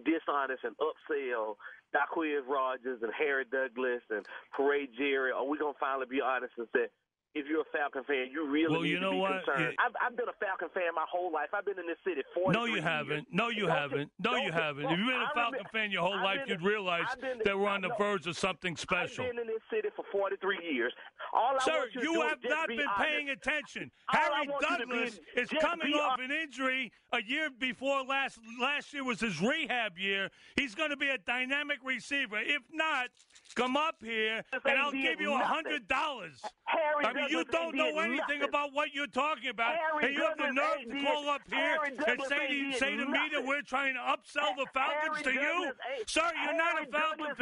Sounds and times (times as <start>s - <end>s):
Speech: 0.0s - 47.4s.